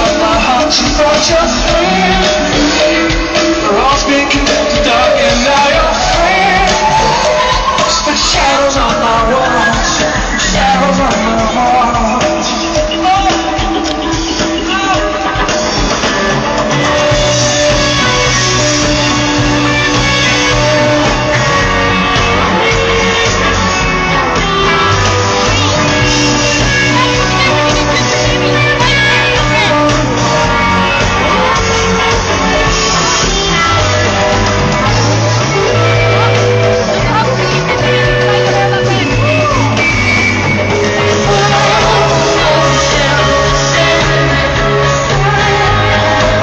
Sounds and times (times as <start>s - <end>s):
Music: 0.0s - 46.4s.